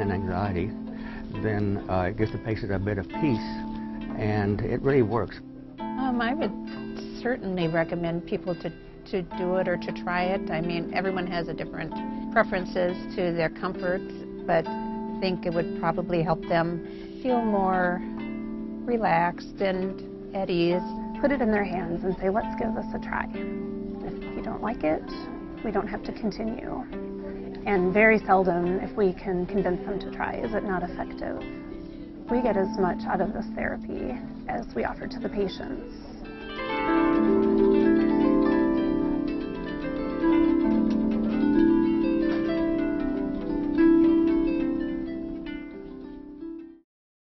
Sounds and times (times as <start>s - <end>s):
Harp: 0.0s - 46.8s.